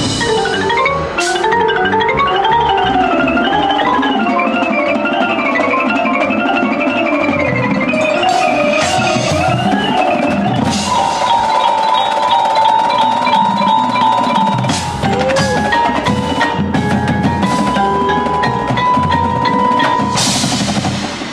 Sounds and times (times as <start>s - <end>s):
Independent music: 0.0s - 21.3s.